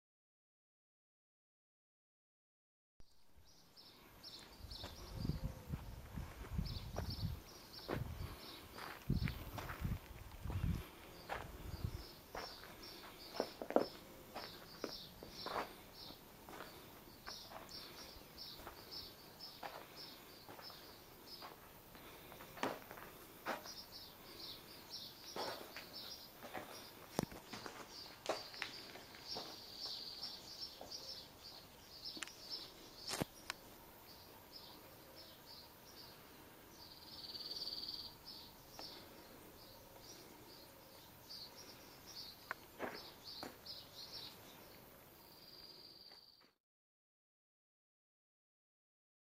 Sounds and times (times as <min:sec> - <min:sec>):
Walk, footsteps: 0:08.8 - 0:11.7, 0:25.3 - 0:30.0, 0:42.5 - 0:43.6.